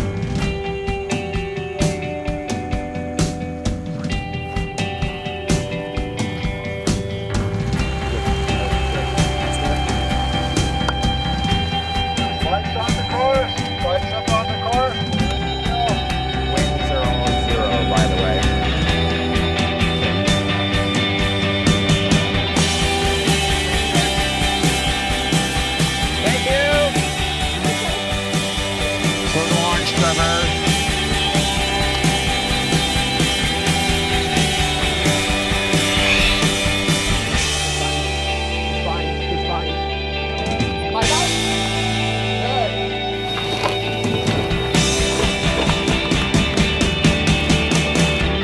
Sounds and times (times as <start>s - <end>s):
Music: 0.0s - 48.4s.